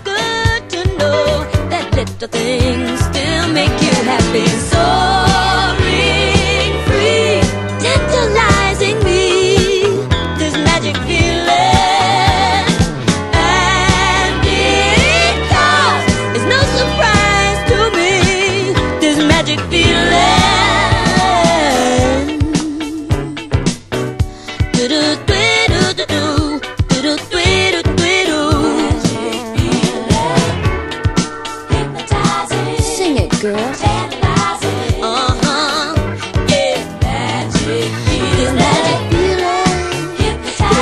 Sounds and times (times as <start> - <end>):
Pop music: 0.0 - 40.8.